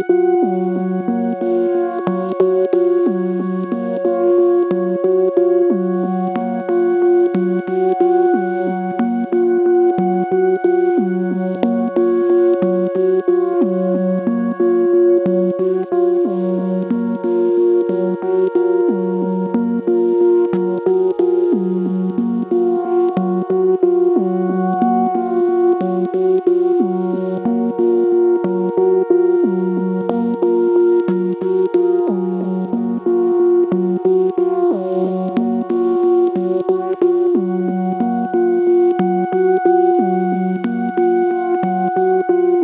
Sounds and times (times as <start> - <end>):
Synthesizer: 0.0 - 42.6.